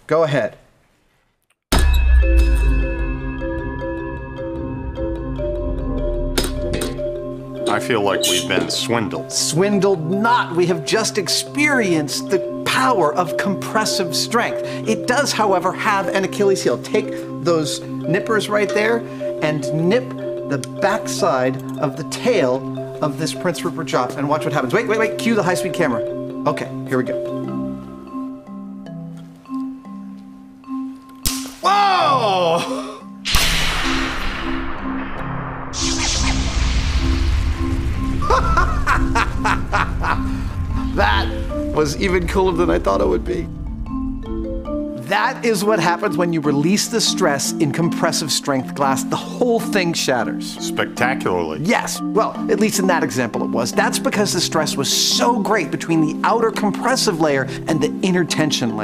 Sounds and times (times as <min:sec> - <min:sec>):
Speech: 0:00.1 - 0:00.6, 0:07.7 - 0:27.2, 0:45.0 - 0:58.8
Music: 0:01.7 - 0:58.8.